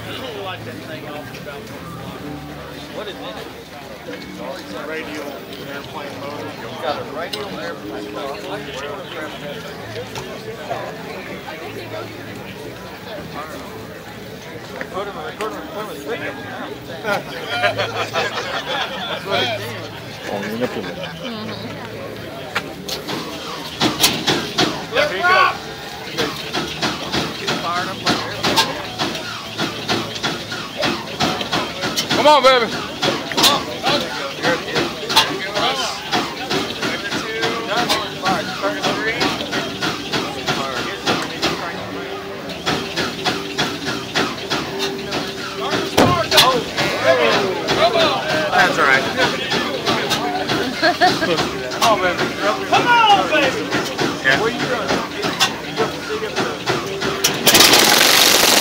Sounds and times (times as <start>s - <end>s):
Speech: 0.0s - 57.4s
Vehicle: 0.0s - 58.6s.